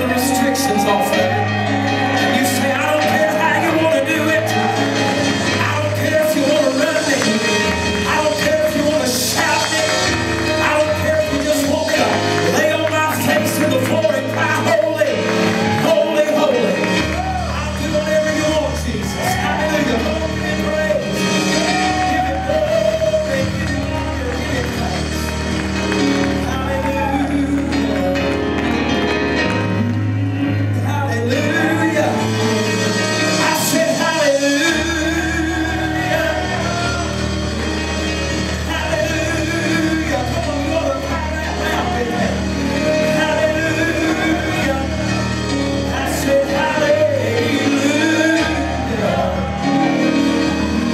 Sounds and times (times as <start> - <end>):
Music: 0.0 - 50.9.